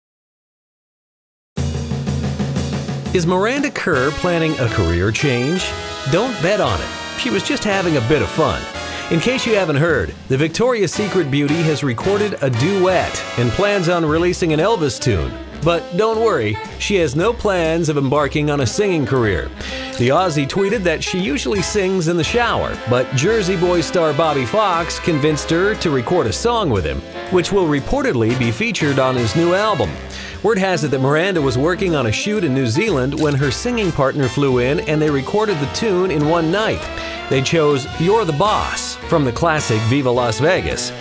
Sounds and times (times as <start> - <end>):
Music: 1.6 - 41.0
Speech: 3.1 - 41.0.